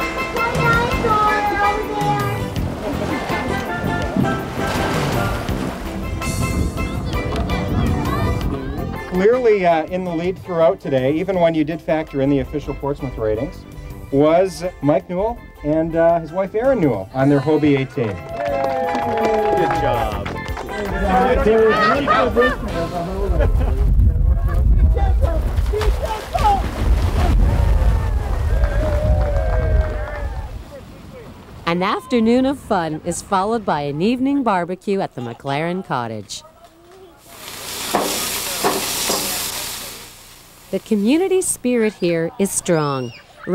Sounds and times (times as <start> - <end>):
Outside, rural or natural: 0.0 - 43.5.